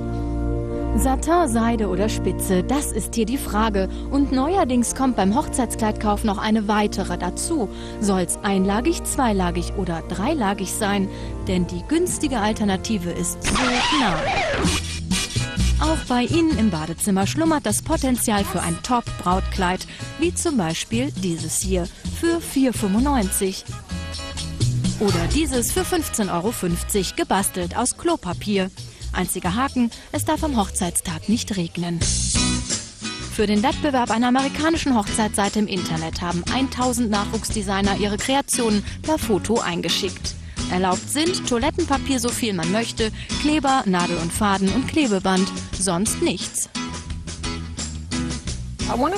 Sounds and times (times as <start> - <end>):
Music: 0.0 - 49.1
Speech: 1.0 - 14.4, 15.8 - 23.8, 25.0 - 32.1, 33.3 - 46.7, 48.9 - 49.1.